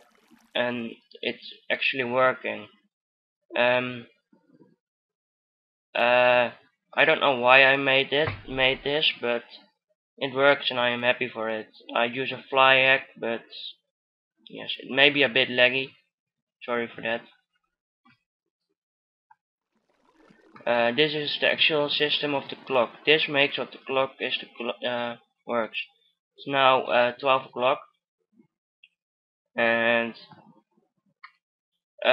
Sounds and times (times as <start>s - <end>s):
Speech: 0.6s - 2.7s, 3.6s - 4.0s, 6.0s - 9.6s, 10.2s - 13.8s, 14.5s - 15.9s, 16.6s - 17.3s, 20.7s - 27.8s, 29.6s - 30.4s.